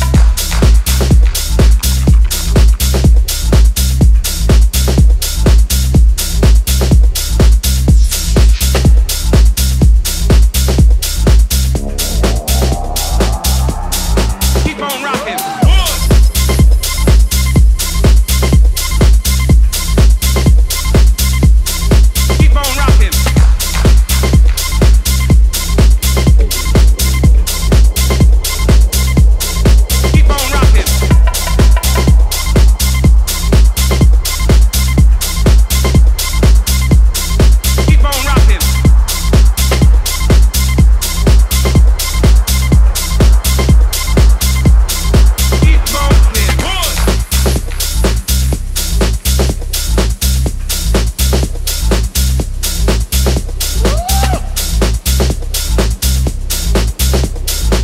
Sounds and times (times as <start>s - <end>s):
Exciting music: 0.0s - 5.6s, 7.7s - 55.4s.